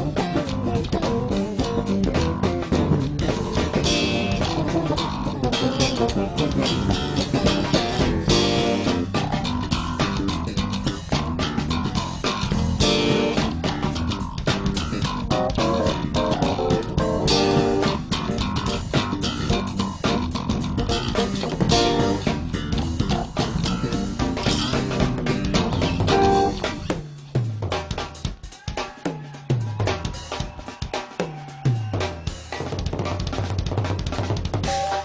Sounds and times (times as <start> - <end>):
Bass guitar: 0.0 - 30.6, 31.5 - 35.0.